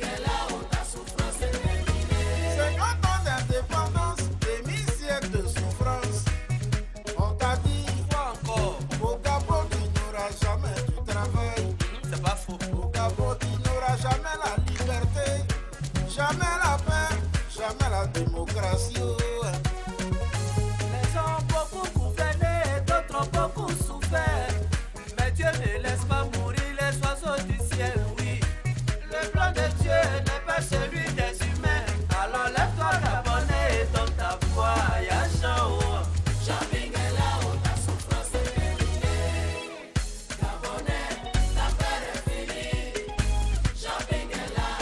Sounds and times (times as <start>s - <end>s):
Music: 0.0s - 44.8s.